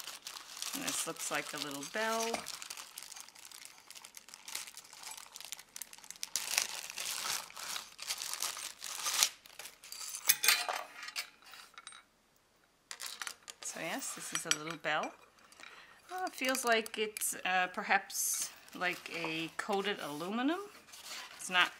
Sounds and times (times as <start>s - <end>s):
Speech: 0.7s - 2.5s, 13.6s - 15.2s, 16.1s - 20.8s, 21.4s - 21.7s.